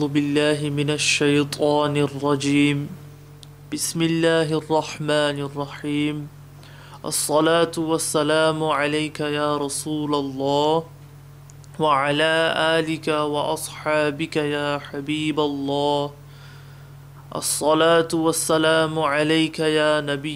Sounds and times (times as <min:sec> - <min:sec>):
Male speech, man speaking: 0:00.0 - 0:03.0, 0:03.7 - 0:06.3, 0:07.0 - 0:10.9, 0:11.8 - 0:16.2, 0:17.3 - 0:20.3
Narration, monologue: 0:00.0 - 0:20.3.